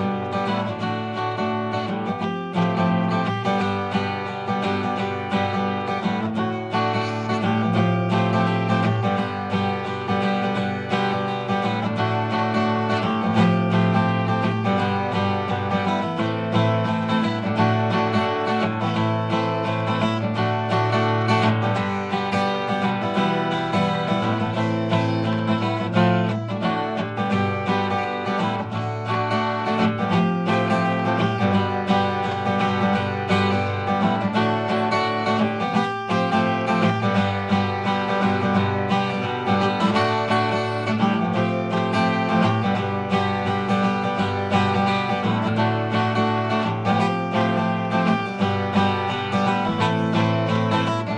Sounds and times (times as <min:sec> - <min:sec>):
Acoustic guitar: 0:00.0 - 0:51.1
Strum: 0:00.0 - 0:51.1.